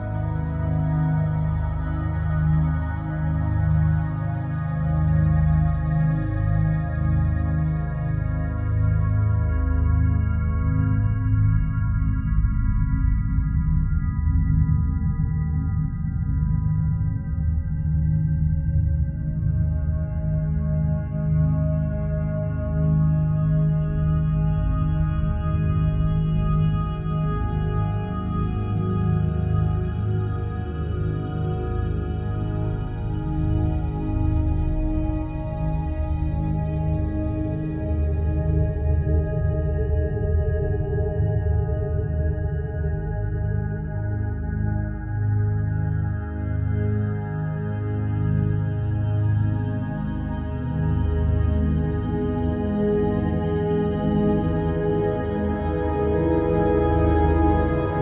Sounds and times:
Chirp tone: 0.0s - 58.0s.

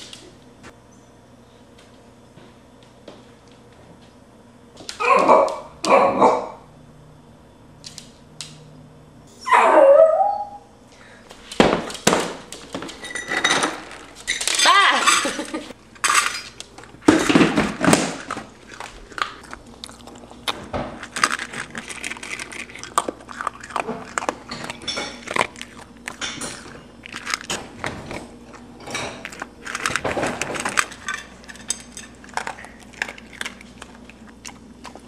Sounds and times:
Bow-wow: 5.0s - 6.6s
Yip: 5.0s - 6.6s, 9.4s - 10.6s
Whimper (dog): 9.4s - 10.7s.

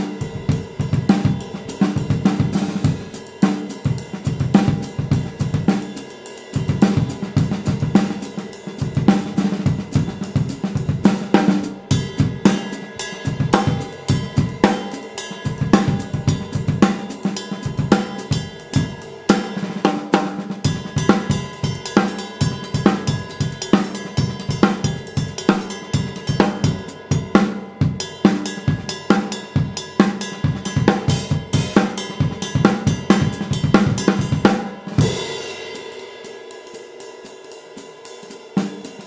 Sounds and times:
Drum kit: 0.0s - 39.0s.

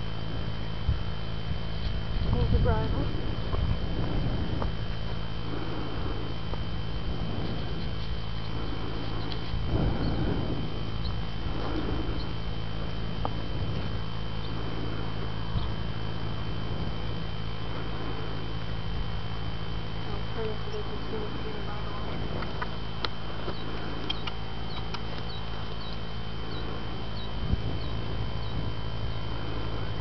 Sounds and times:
Speech: 2.3s - 3.2s, 20.1s - 22.2s.

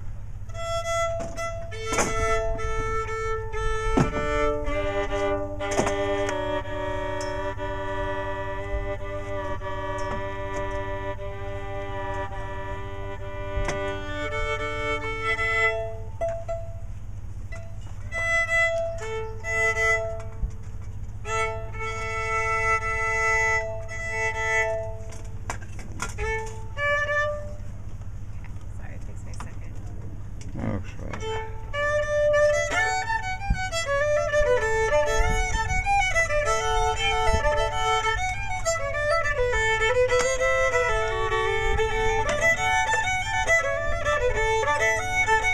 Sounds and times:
Violin, fiddle: 0.0s - 16.9s, 17.5s - 28.1s, 31.0s - 45.5s
Speech: 28.7s - 31.2s.

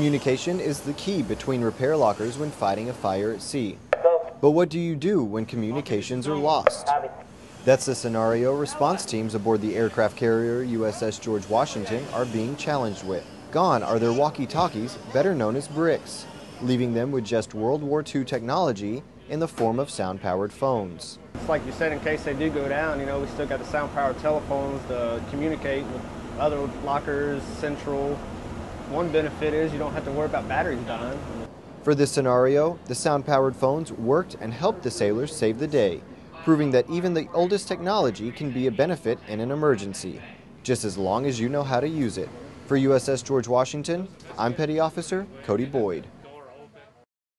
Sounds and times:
Speech: 0.0s - 28.2s, 28.9s - 31.2s, 31.9s - 47.1s.

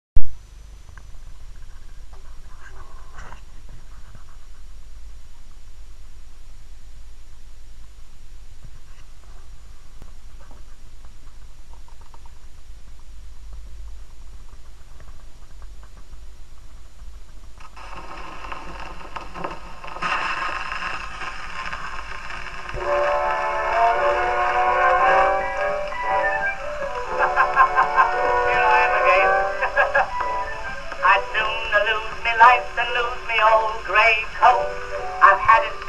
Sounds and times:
Silence: 0.2s - 22.9s.

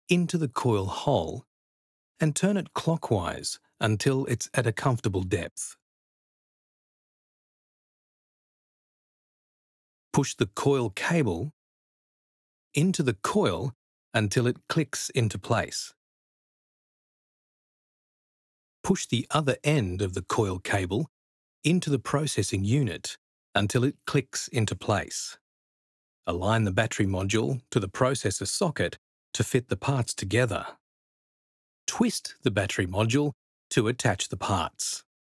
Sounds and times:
Speech: 0.1s - 1.5s, 2.2s - 5.8s, 10.2s - 11.6s, 12.8s - 16.0s, 18.9s - 21.1s, 21.7s - 25.4s, 26.3s - 30.8s, 31.9s - 35.1s.

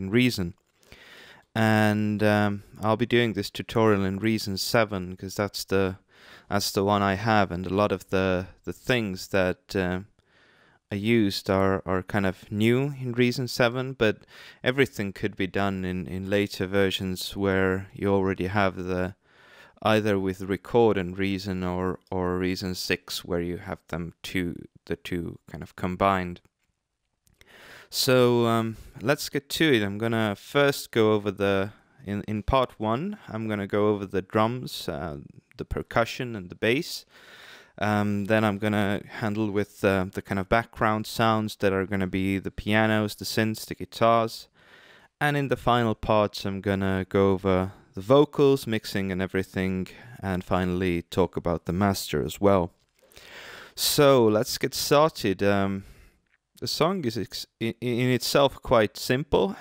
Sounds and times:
Speech: 0.0s - 0.6s, 1.5s - 10.1s, 10.9s - 19.2s, 19.8s - 26.5s, 27.9s - 37.1s, 37.7s - 44.5s, 45.2s - 52.8s, 53.8s - 56.0s, 56.6s - 59.6s.

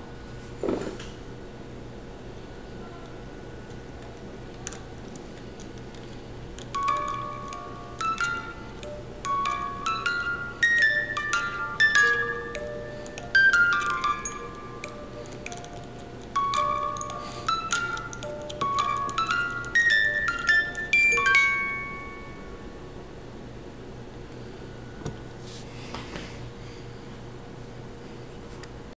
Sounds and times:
Music: 6.7s - 22.7s.

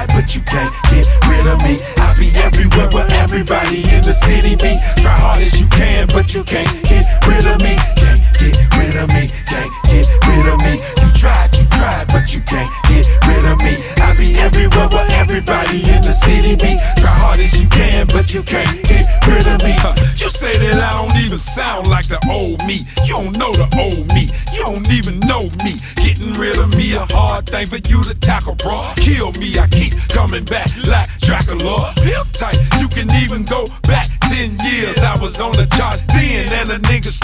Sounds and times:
Afrobeat: 0.0s - 37.2s.

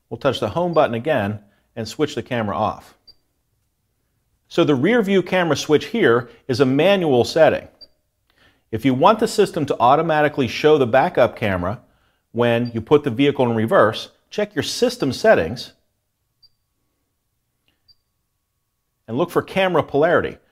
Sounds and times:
Speech: 0.1s - 3.0s, 4.5s - 7.8s, 8.8s - 11.8s, 12.4s - 15.8s, 19.1s - 20.4s.

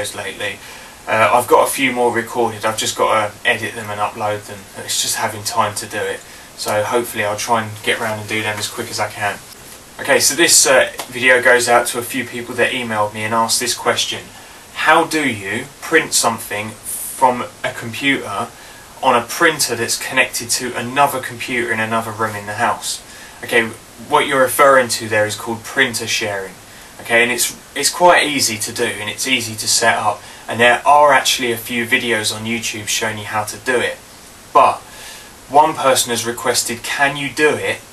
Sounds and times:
Speech: 0.0s - 34.9s, 35.5s - 37.9s.

